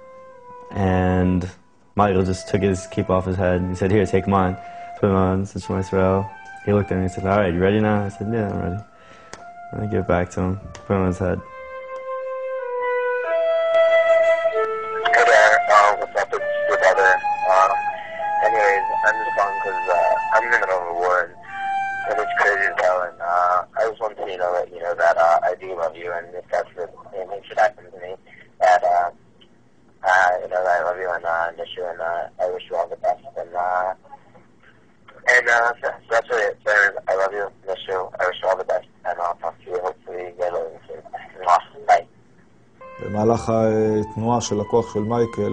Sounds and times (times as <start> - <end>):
Music: 0.0 - 26.5, 42.8 - 45.5
Speech: 0.7 - 8.8, 9.7 - 11.4, 15.1 - 21.4, 22.0 - 29.2, 30.0 - 34.1, 35.1 - 42.1, 43.0 - 45.5.